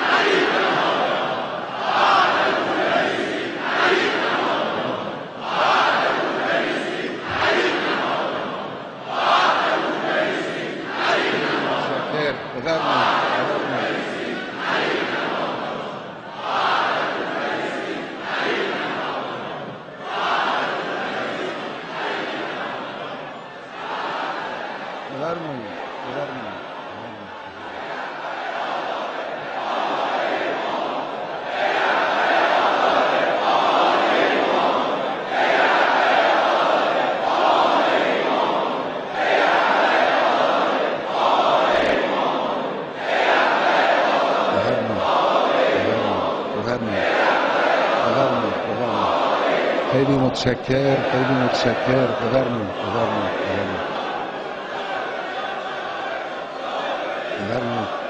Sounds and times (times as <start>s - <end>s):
Crowd: 0.0s - 58.1s
Male speech, man speaking: 11.6s - 14.0s, 25.1s - 27.4s, 44.5s - 45.2s, 45.8s - 47.2s, 48.0s - 49.3s, 49.9s - 53.9s, 57.4s - 58.0s.